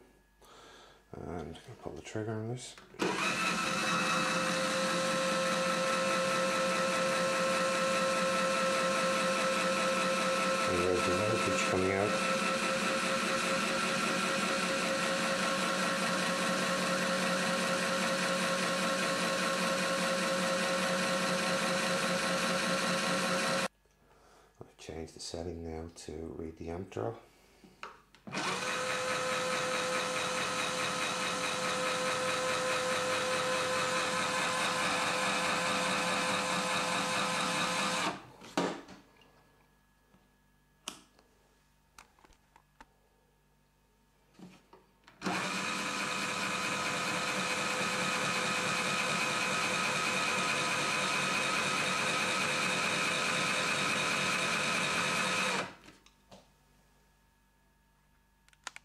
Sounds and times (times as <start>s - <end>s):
Drill: 3.0s - 23.7s, 28.3s - 38.3s, 45.2s - 55.8s.